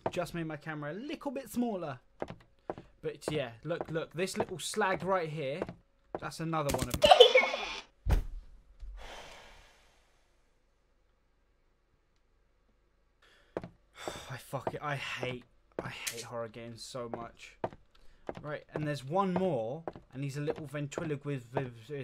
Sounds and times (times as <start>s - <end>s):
Speech: 0.1s - 2.0s, 3.0s - 7.8s, 14.3s - 17.6s, 18.4s - 22.0s.